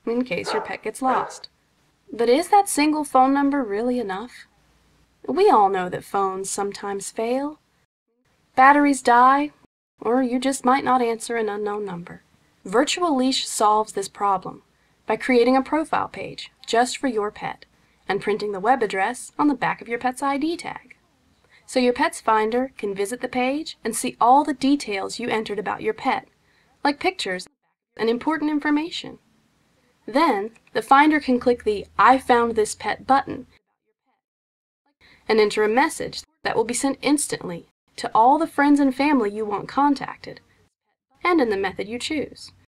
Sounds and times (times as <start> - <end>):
Speech: 0.0 - 1.5, 2.1 - 4.5, 5.2 - 7.6, 8.6 - 29.2, 30.0 - 33.6, 35.3 - 40.4, 41.2 - 42.7.